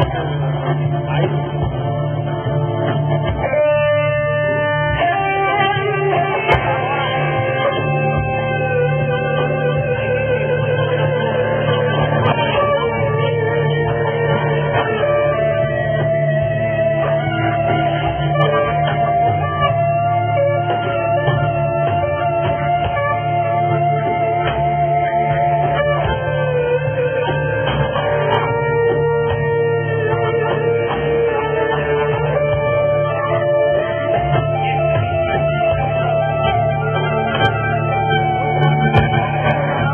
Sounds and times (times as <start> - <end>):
Inside, large room or hall: 0.0 - 39.9
Music: 0.0 - 39.9.